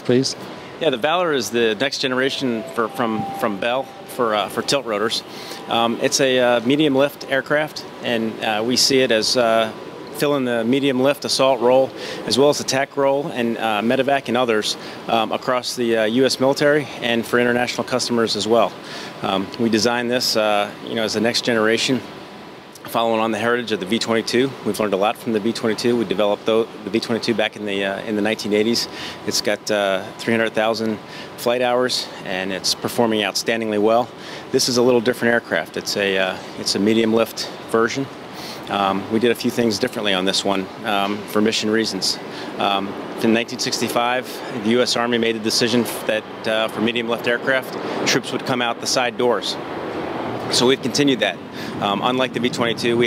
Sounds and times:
Speech: 0:00.0 - 0:22.1, 0:22.8 - 0:38.1, 0:38.7 - 0:49.6, 0:50.5 - 0:53.0.

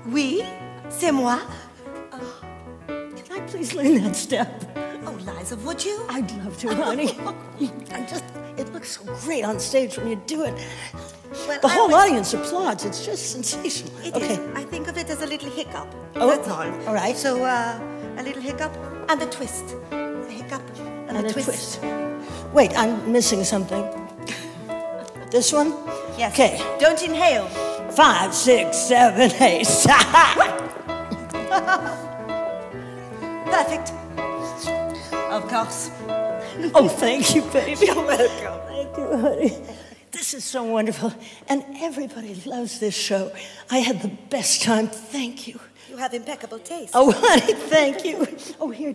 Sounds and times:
Music: 0:00.0 - 0:48.9.

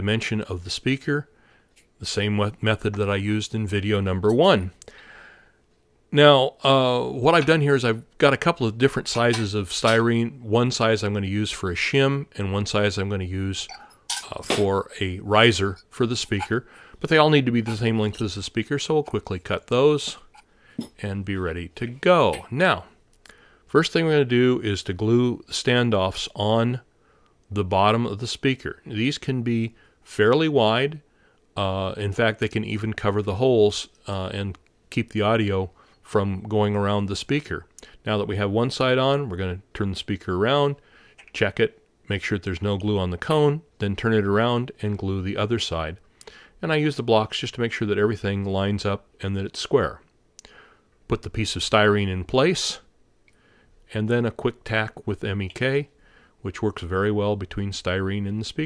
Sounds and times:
Speech: 0:00.0 - 0:01.3, 0:02.0 - 0:04.8, 0:06.1 - 0:23.0, 0:23.7 - 0:26.9, 0:27.5 - 0:46.0, 0:46.6 - 0:50.1, 0:51.1 - 0:52.9, 0:53.9 - 0:58.6.

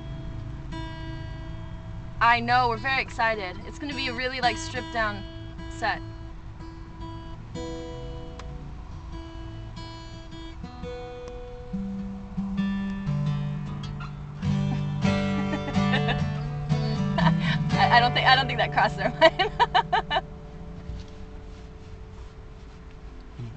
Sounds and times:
Music: 0:00.0 - 0:23.5
Speech: 0:02.2 - 0:05.2, 0:17.8 - 0:19.2.

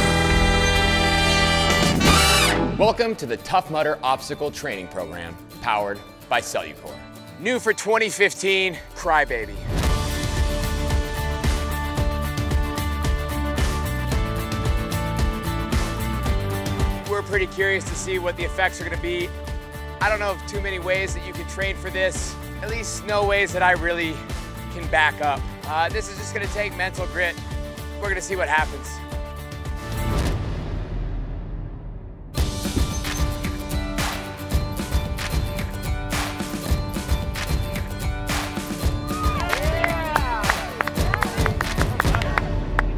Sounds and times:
Music: 0:00.0 - 0:42.9
Speech: 0:02.8 - 0:09.6, 0:17.1 - 0:19.3, 0:20.0 - 0:27.4, 0:28.0 - 0:29.0.

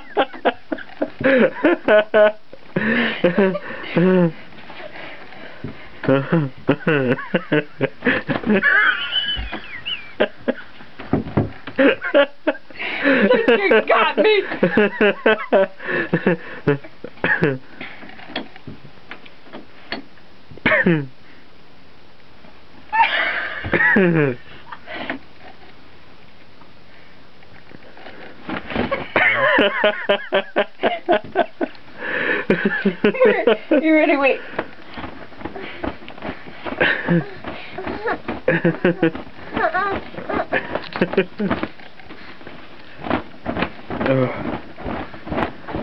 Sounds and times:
Speech: 0:13.3 - 0:14.5, 0:33.2 - 0:34.4.

